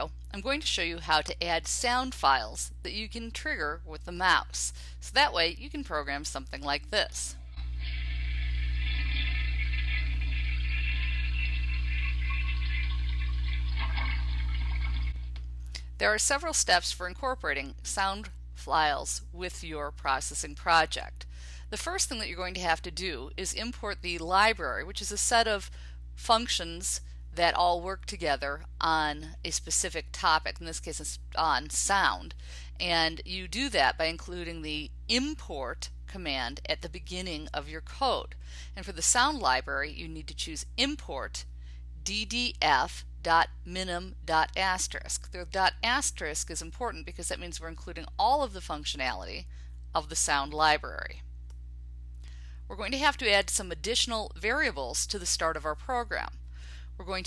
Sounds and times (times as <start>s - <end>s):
Speech: 0.0s - 7.4s, 15.8s - 41.4s, 42.0s - 49.4s, 50.0s - 51.2s, 52.7s - 56.4s, 57.0s - 57.2s.